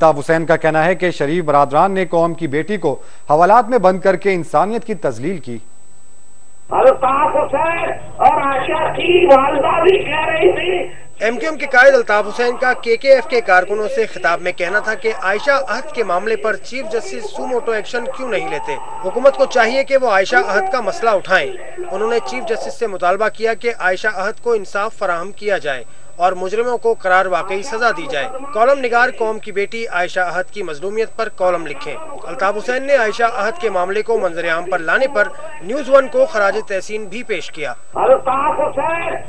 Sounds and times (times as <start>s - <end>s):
Male speech, man speaking: 0.0s - 5.7s, 6.7s - 39.2s
Narration, monologue: 0.0s - 39.2s.